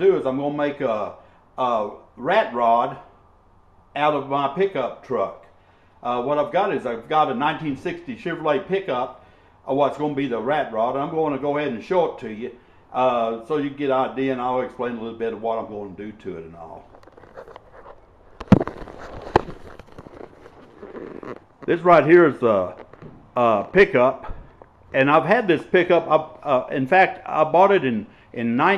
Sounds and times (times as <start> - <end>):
Speech: 0.0 - 3.1, 4.0 - 16.8, 21.7 - 22.8, 23.4 - 24.3, 25.0 - 28.7.